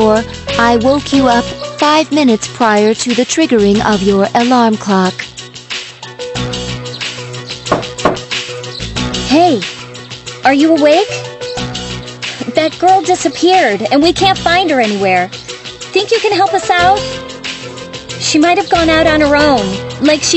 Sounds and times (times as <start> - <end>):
Speech: 0.0 - 5.2, 9.3 - 9.7, 10.4 - 11.3, 12.4 - 15.3, 16.0 - 17.2, 18.2 - 20.3
Music: 0.0 - 20.3.